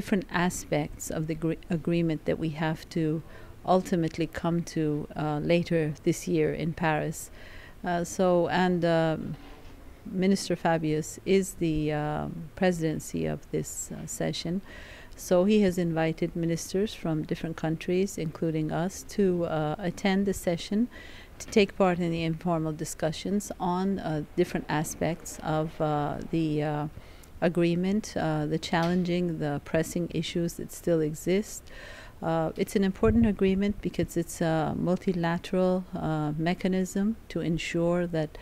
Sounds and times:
Female speech, woman speaking: 0:00.0 - 0:09.4, 0:10.1 - 0:14.6, 0:15.2 - 0:31.6, 0:32.2 - 0:38.4.

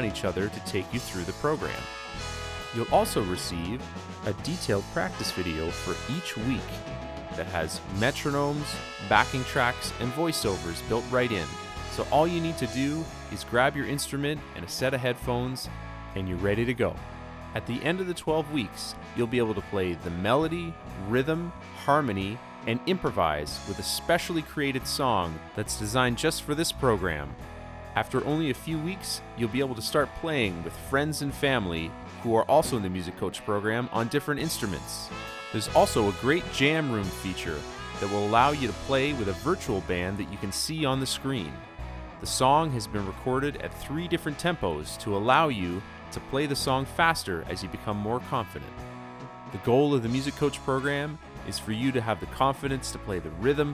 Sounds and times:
Speech: 0:00.0 - 0:01.9, 0:02.7 - 0:17.0, 0:17.6 - 0:27.4, 0:28.0 - 0:41.6, 0:42.2 - 0:48.8, 0:49.6 - 0:53.7.

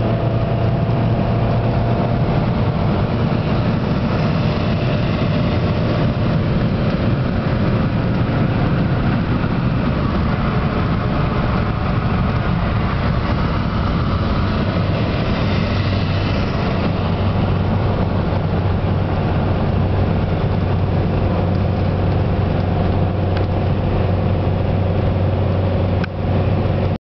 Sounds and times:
Car passing by: 0:00.0 - 0:22.9.

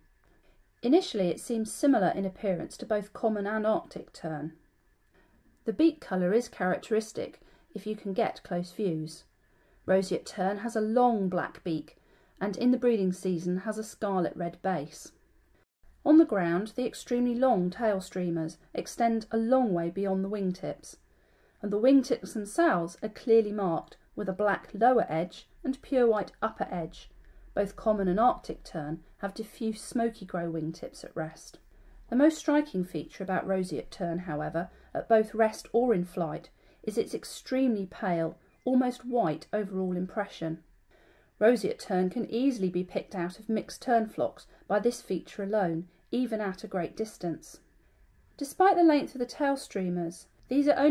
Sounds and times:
Speech: 0:00.8 - 0:04.6, 0:05.7 - 0:09.3, 0:09.9 - 0:15.2, 0:16.0 - 0:21.0, 0:21.6 - 0:40.6, 0:41.4 - 0:47.6, 0:48.4 - 0:50.9.

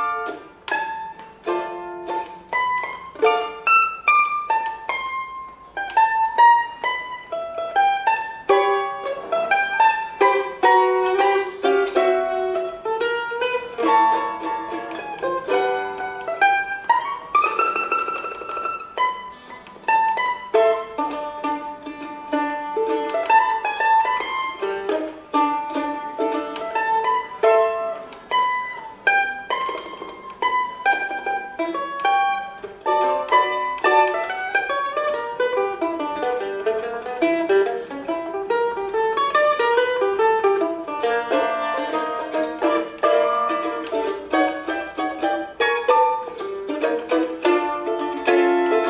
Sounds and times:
Pizzicato: 0:00.0 - 0:48.8.

